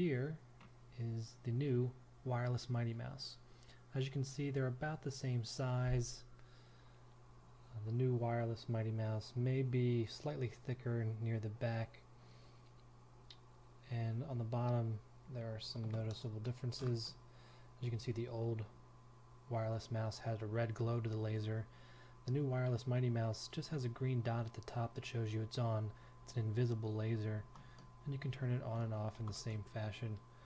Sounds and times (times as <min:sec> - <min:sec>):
Speech: 0:00.0 - 0:06.3, 0:07.7 - 0:12.0, 0:13.8 - 0:17.2, 0:17.8 - 0:18.8, 0:19.5 - 0:30.3.